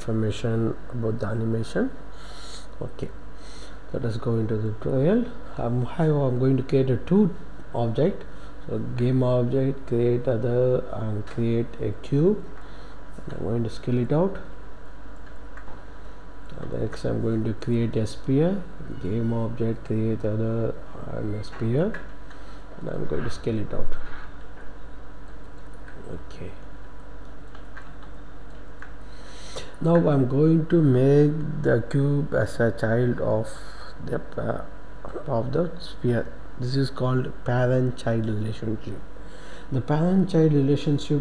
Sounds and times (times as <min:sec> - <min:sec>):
Speech: 0:00.0 - 0:03.2, 0:03.9 - 0:12.5, 0:13.2 - 0:14.5, 0:16.5 - 0:22.1, 0:22.8 - 0:24.2, 0:26.0 - 0:26.6, 0:29.6 - 0:39.1, 0:39.7 - 0:41.2.